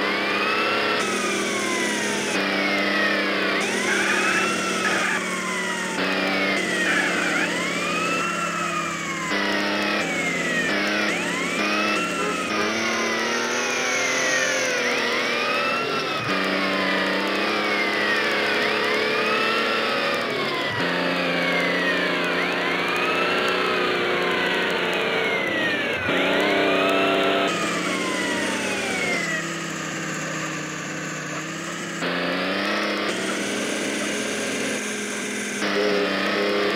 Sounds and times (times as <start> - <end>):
Accelerating, revving, vroom: 0.0 - 36.7
Vehicle: 0.0 - 36.7.